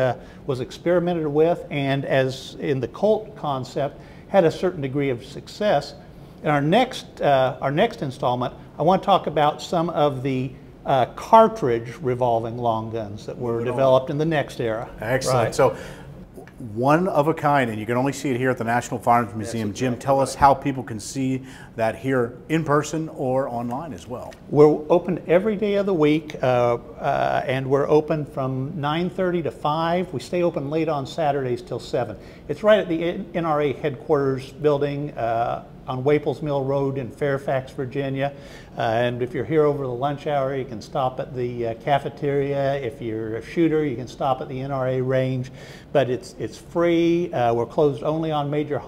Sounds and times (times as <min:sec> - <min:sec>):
Speech: 0:00.0 - 0:15.8, 0:16.4 - 0:48.8.